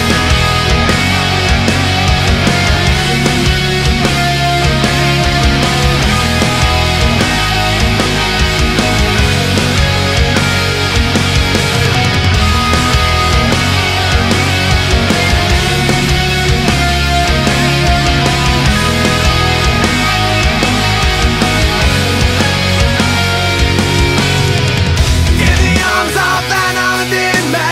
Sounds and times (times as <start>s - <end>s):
Guitar: 0.0s - 27.7s.